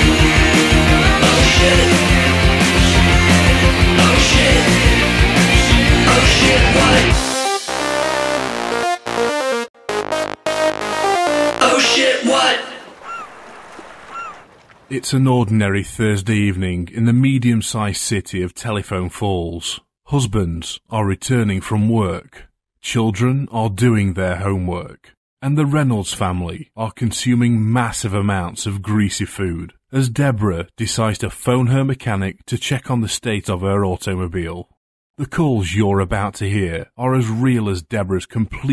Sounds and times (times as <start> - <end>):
Music: 0.0 - 12.6
Speech: 11.6 - 12.9, 14.9 - 38.7.